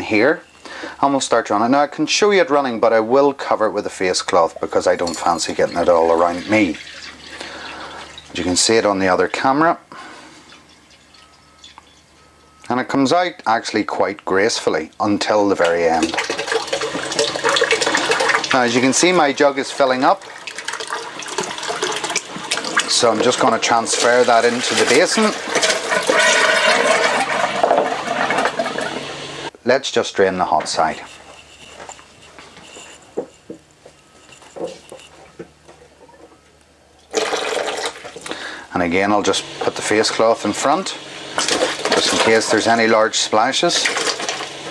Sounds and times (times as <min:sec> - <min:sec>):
Sink (filling or washing): 0:04.0 - 0:12.3, 0:15.2 - 0:29.5, 0:37.1 - 0:44.7
Water tap, faucet: 0:04.4 - 0:12.1, 0:15.5 - 0:29.5, 0:37.1 - 0:44.7
Water: 0:04.4 - 0:12.4, 0:15.5 - 0:29.5.